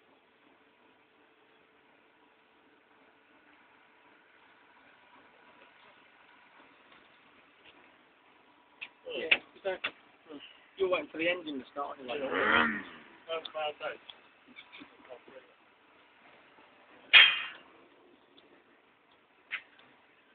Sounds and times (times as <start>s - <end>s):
Speech: 9.1s - 12.6s, 13.3s - 14.0s, 14.9s - 15.6s.